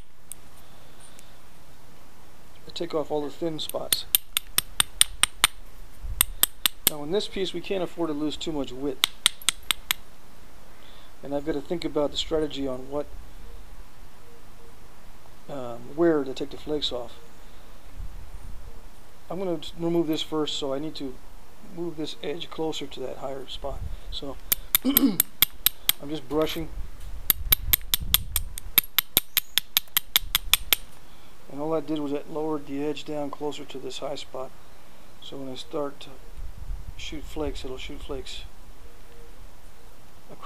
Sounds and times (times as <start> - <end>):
Speech: 2.6 - 4.1, 6.9 - 9.0, 11.2 - 13.1, 15.5 - 17.2, 19.3 - 24.4, 26.0 - 26.7, 31.5 - 34.5, 35.2 - 36.2, 37.0 - 38.5.